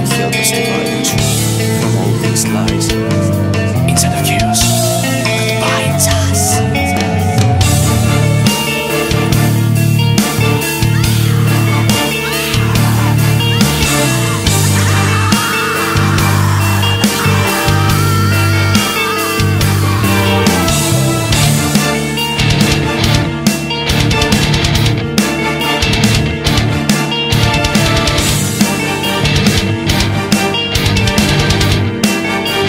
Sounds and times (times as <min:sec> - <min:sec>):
Grunge: 0:00.0 - 0:32.6.